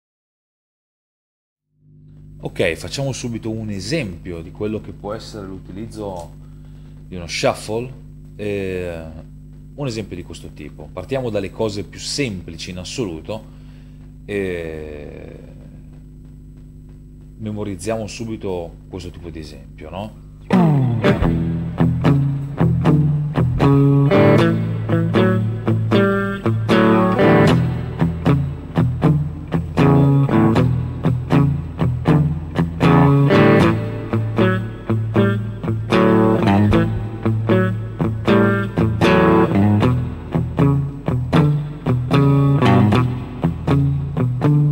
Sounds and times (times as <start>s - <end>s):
Bass guitar: 20.4s - 44.7s
Rock music: 20.5s - 44.7s
Steel guitar, slide guitar: 20.5s - 44.7s.